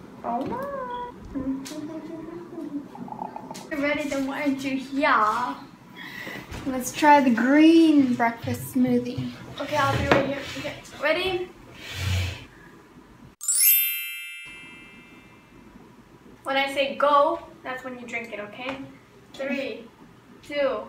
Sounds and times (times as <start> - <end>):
Female speech, woman speaking: 0.2 - 2.8, 3.7 - 5.7, 6.6 - 11.5, 16.5 - 20.8.